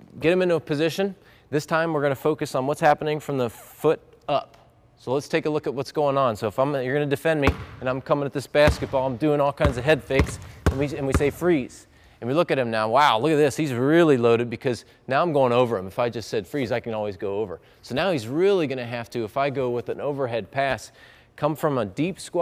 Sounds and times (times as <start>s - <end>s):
Basketball bounce: 7.5s - 7.9s, 8.6s - 11.6s.